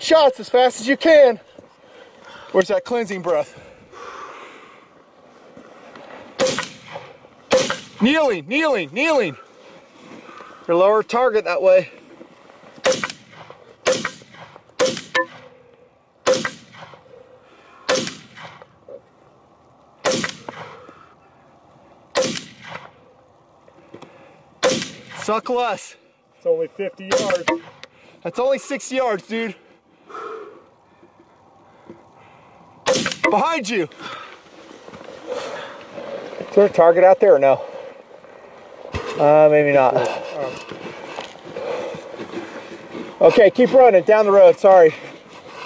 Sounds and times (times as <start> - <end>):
Speech: 0.0 - 1.4, 2.5 - 3.6, 8.0 - 9.4, 10.7 - 12.0, 25.2 - 27.5, 28.2 - 29.6, 33.3 - 33.9, 36.5 - 37.6, 39.2 - 40.6, 43.2 - 45.0
Outside, rural or natural: 0.0 - 45.6.